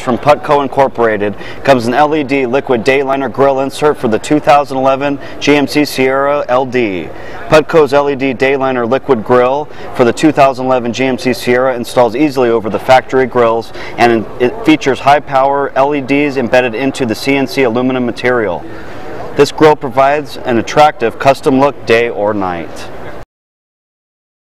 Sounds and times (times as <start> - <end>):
Speech: 0.0 - 18.7, 19.3 - 23.0.